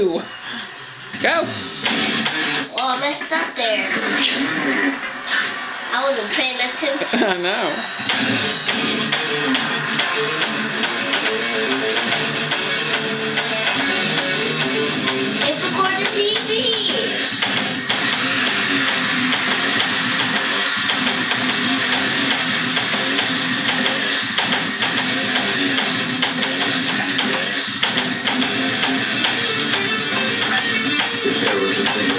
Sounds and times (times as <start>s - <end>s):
Speech: 2.7s - 4.9s, 5.9s - 7.8s, 15.4s - 17.2s, 30.5s - 32.1s.